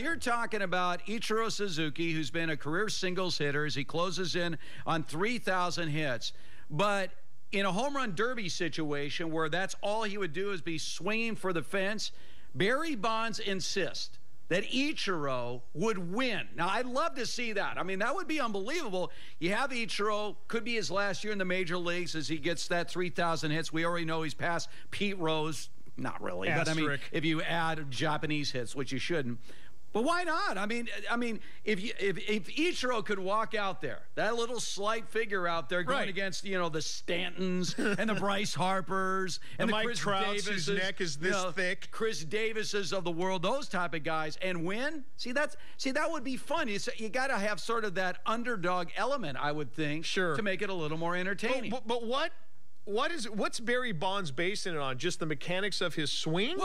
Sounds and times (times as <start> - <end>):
Speech: 0.0 - 29.4, 30.0 - 56.6.